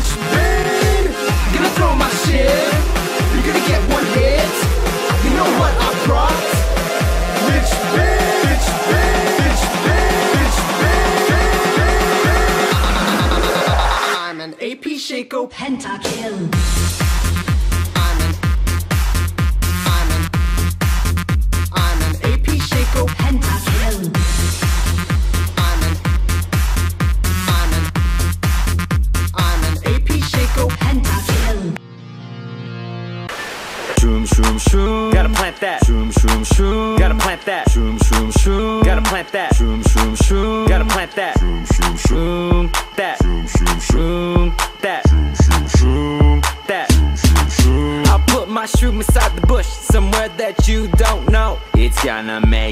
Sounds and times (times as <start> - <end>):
Disco: 0.0 - 14.5, 16.0 - 31.8, 33.4 - 52.7.